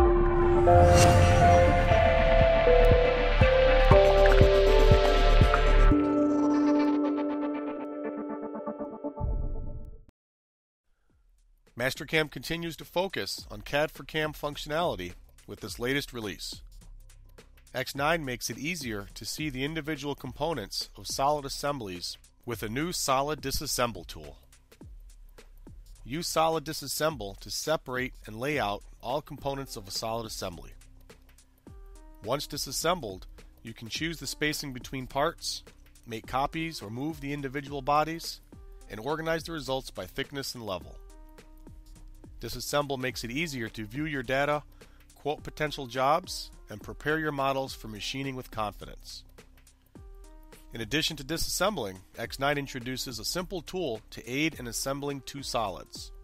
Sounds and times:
Music: 0.0s - 10.1s, 10.9s - 56.2s
Speech: 11.8s - 16.6s, 17.7s - 24.4s, 26.0s - 30.8s, 32.2s - 41.0s, 42.4s - 44.6s, 45.2s - 49.2s, 50.8s - 56.2s.

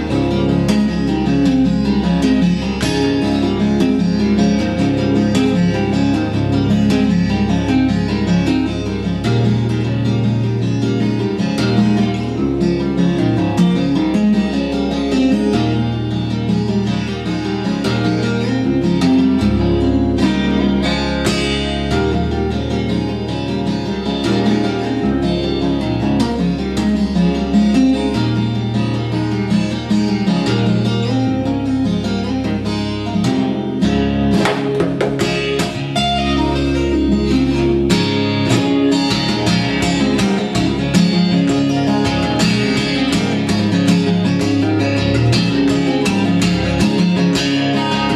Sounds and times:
Acoustic guitar: 0.0s - 48.1s
Strum: 0.0s - 48.1s.

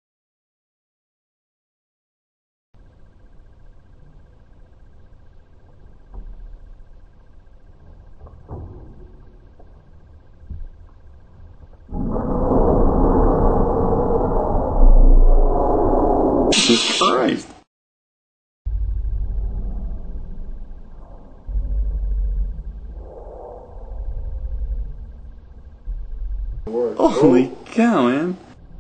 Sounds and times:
Hiss: 16.5s - 17.2s.

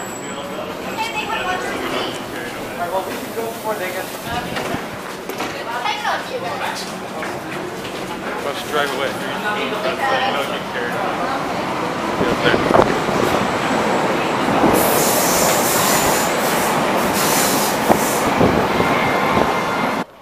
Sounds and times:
Subway, metro, underground: 0.0s - 20.2s
Train: 0.0s - 20.2s.

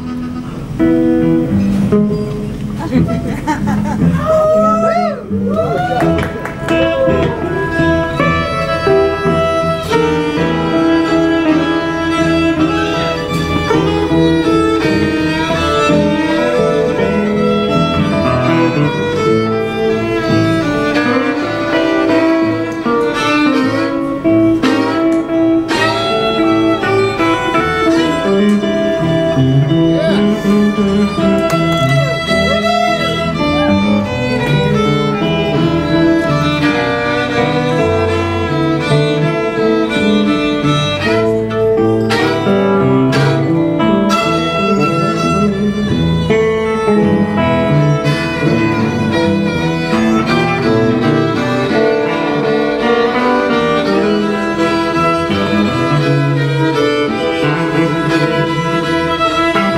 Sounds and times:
Guitar: 0.0s - 59.7s
String section: 0.0s - 59.7s.

